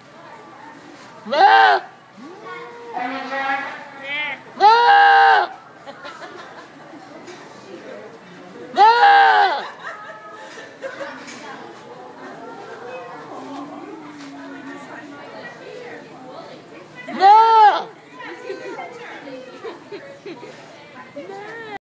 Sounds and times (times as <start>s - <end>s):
Speech: 9.6s - 21.8s.